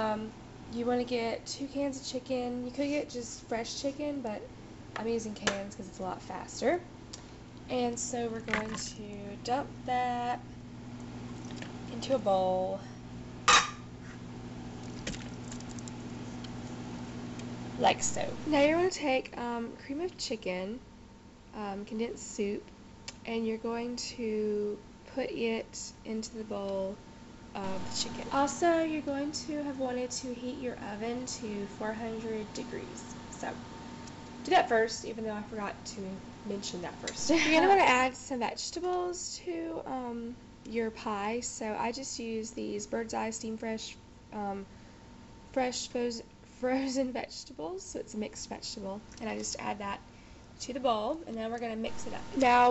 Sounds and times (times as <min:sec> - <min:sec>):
Speech: 0:00.0 - 0:06.9, 0:07.7 - 0:10.4, 0:11.9 - 0:12.9, 0:17.8 - 0:20.9, 0:21.6 - 0:27.0, 0:27.6 - 0:33.6, 0:34.4 - 0:44.7, 0:45.6 - 0:50.0, 0:50.6 - 0:52.7.